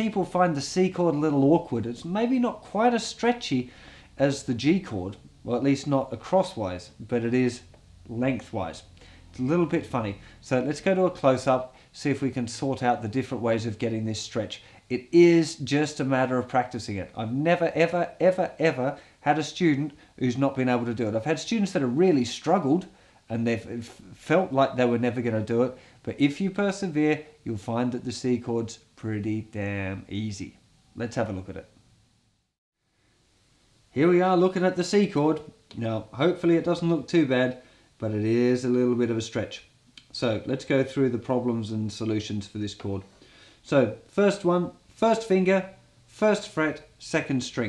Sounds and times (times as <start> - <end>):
Speech: 0.0 - 31.8, 33.9 - 47.6.